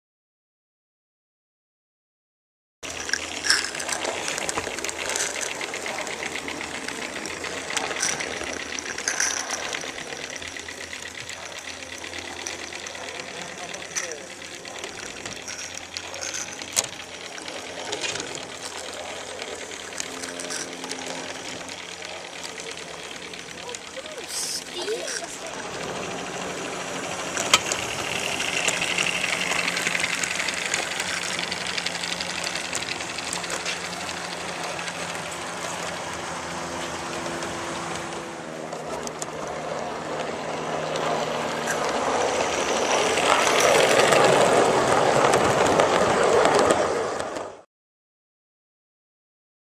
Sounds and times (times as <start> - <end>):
Speech: 13.2 - 15.0, 22.1 - 25.8
Train: 24.7 - 34.4, 41.7 - 47.6.